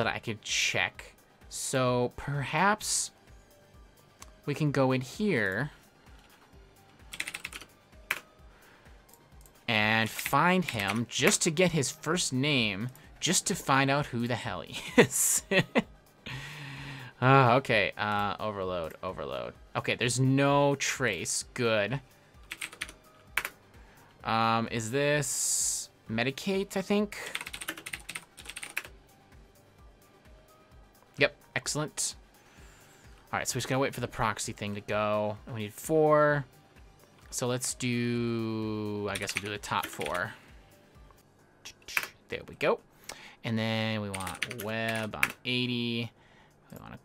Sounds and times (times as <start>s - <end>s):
Typing: 7.1s - 8.2s, 10.6s - 11.0s, 22.5s - 23.6s, 27.3s - 28.9s, 39.1s - 40.2s, 44.1s - 45.4s.